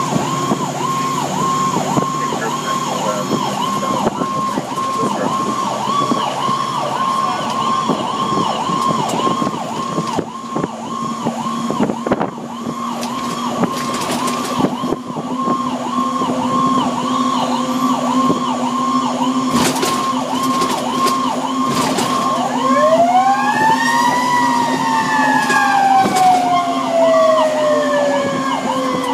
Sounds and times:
Car: 0:00.0 - 0:29.1
Fire engine, fire truck (siren): 0:00.0 - 0:29.1.

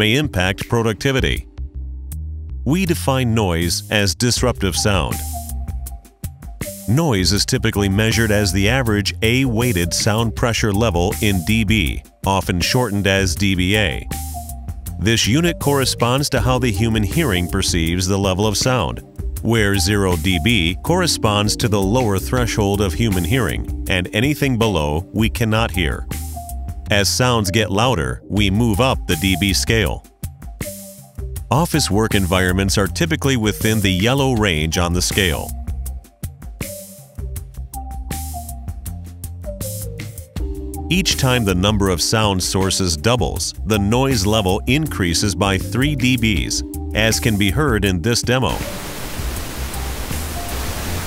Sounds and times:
Speech: 0:00.0 - 0:01.5, 0:02.7 - 0:05.3, 0:06.9 - 0:14.2, 0:15.0 - 0:26.1, 0:26.9 - 0:30.0, 0:31.5 - 0:35.5, 0:40.9 - 0:48.7
Music: 0:00.0 - 0:51.0.

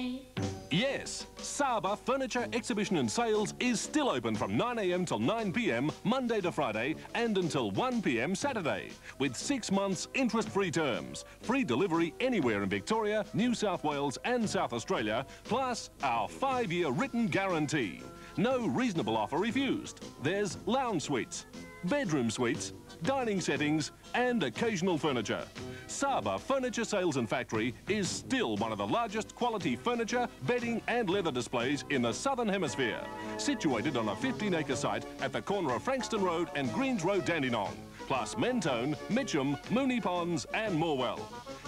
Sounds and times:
Speech: 0:00.0 - 0:41.3
Music: 0:00.0 - 0:41.6.

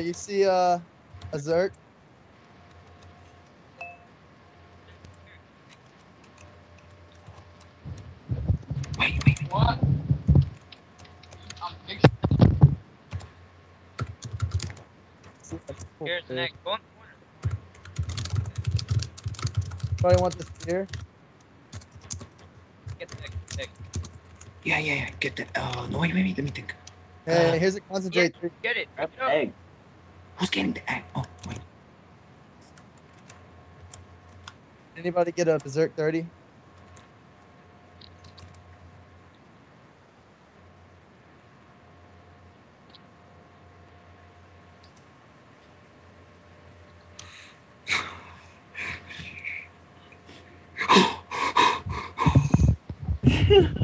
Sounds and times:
Speech: 0:00.0 - 0:00.8, 0:01.4 - 0:01.7, 0:08.3 - 0:10.4, 0:11.4 - 0:12.8, 0:15.5 - 0:17.2, 0:20.0 - 0:21.0, 0:23.0 - 0:23.7, 0:24.7 - 0:29.6, 0:30.4 - 0:31.6, 0:35.0 - 0:36.3, 0:48.8 - 0:49.7, 0:52.2 - 0:53.8.

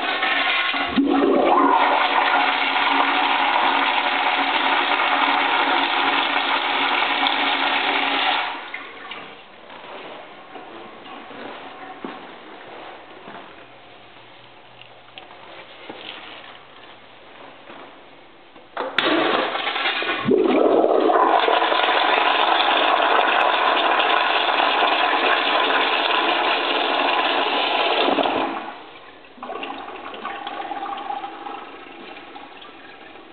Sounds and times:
Toilet flush: 0:00.0 - 0:09.2, 0:19.0 - 0:33.3.

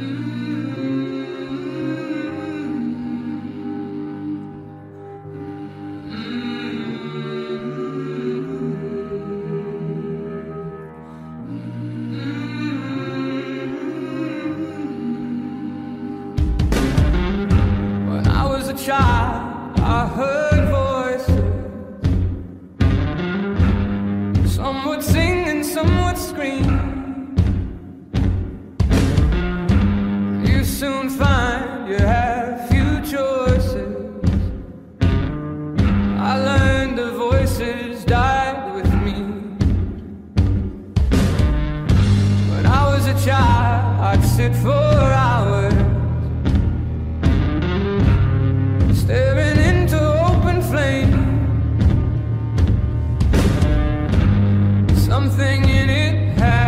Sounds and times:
Music: 0:00.0 - 0:56.6.

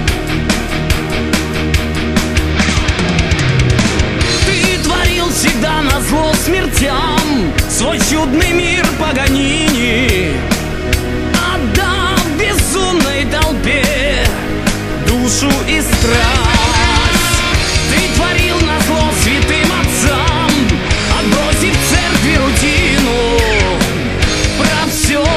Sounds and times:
Musical instrument: 0:00.0 - 0:22.6.

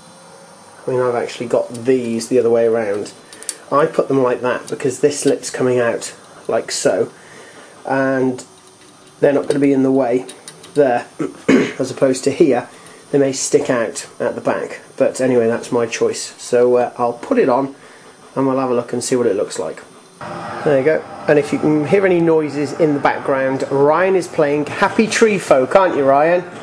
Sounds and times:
Speech: 0:00.8 - 0:07.2, 0:07.8 - 0:08.5, 0:09.2 - 0:17.8, 0:18.4 - 0:19.9, 0:20.7 - 0:26.6.

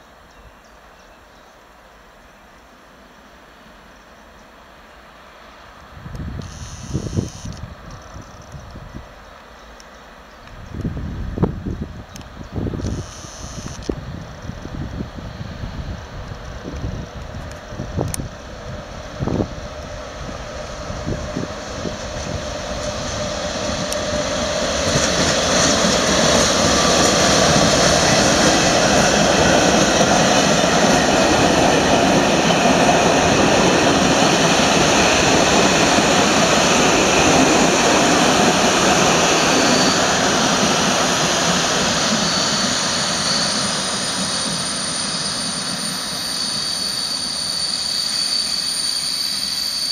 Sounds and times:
Railroad car, train wagon: 0:00.0 - 0:49.9
Train: 0:00.0 - 0:49.9.

